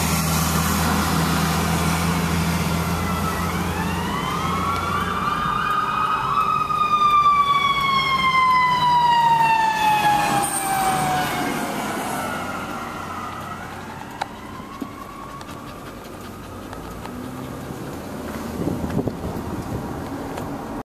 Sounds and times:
Siren: 0.0s - 17.7s
Car: 0.0s - 20.8s.

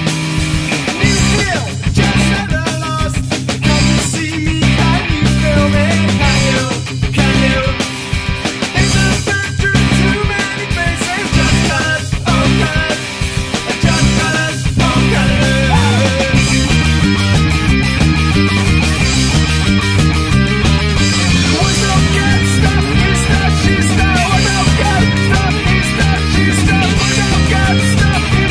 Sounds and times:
Ska: 0.0s - 28.5s
Rhythm and blues: 0.1s - 28.5s.

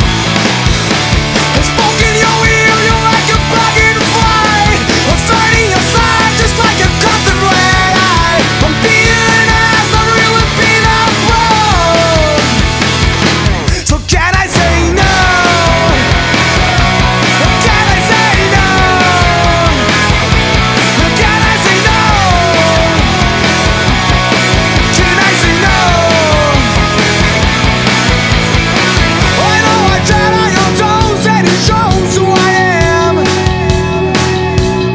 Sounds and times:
Grunge: 0.0s - 34.9s
Punk rock: 0.0s - 34.9s.

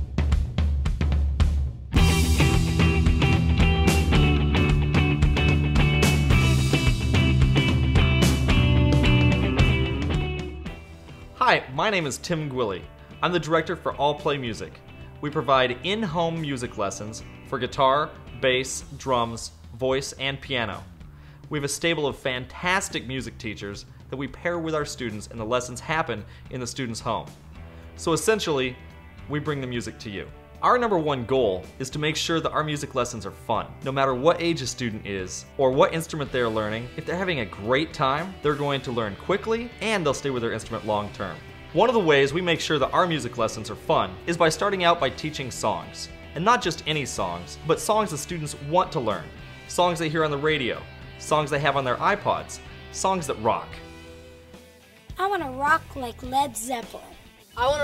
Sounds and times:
Background music: 0.0s - 57.8s
Speech: 11.4s - 20.9s, 21.5s - 27.3s, 28.0s - 53.8s, 55.2s - 57.8s.

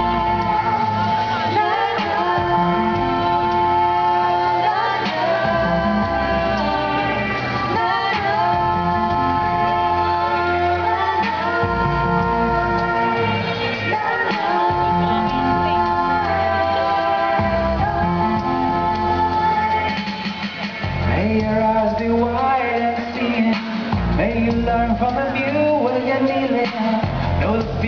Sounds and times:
Music: 0.0s - 27.8s.

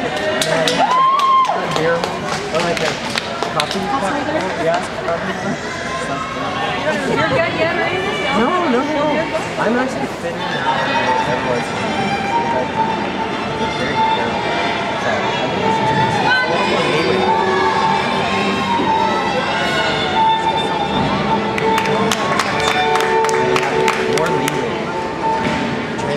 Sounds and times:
Music: 10.4s - 26.1s.

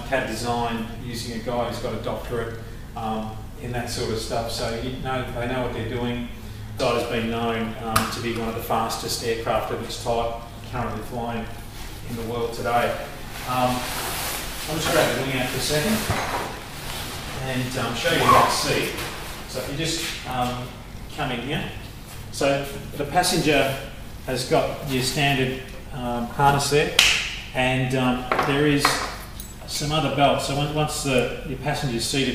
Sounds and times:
Speech: 0.0s - 14.0s, 14.6s - 16.1s, 17.3s - 27.0s, 27.6s - 32.3s.

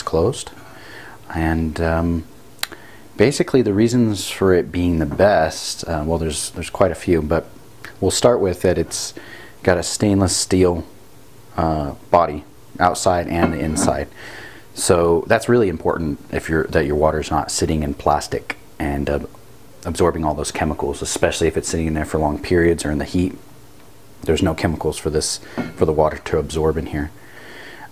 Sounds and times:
Speech: 0.0s - 0.6s, 1.3s - 2.3s, 3.2s - 14.2s, 14.8s - 23.5s, 24.2s - 27.2s.

